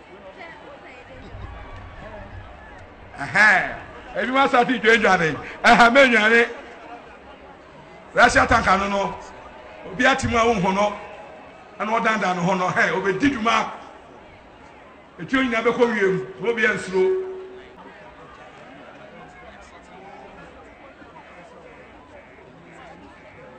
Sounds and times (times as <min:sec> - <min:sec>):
Speech: 0:03.2 - 0:11.0, 0:11.8 - 0:13.8, 0:15.2 - 0:23.5.